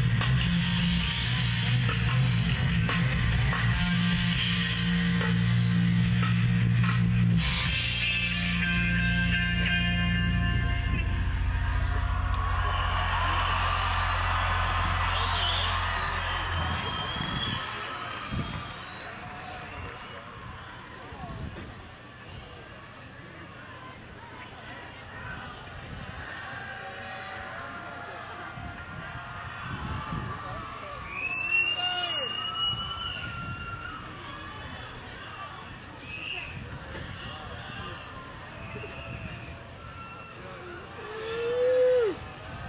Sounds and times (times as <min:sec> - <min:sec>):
Music: 0:00.0 - 0:17.6.